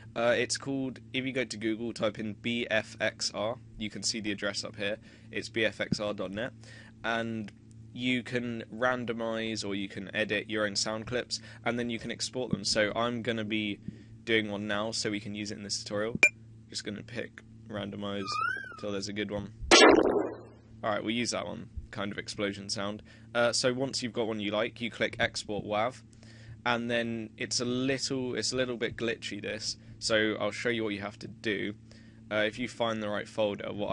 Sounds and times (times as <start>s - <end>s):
Speech: 0.2s - 19.5s, 20.8s - 26.0s, 26.6s - 33.9s.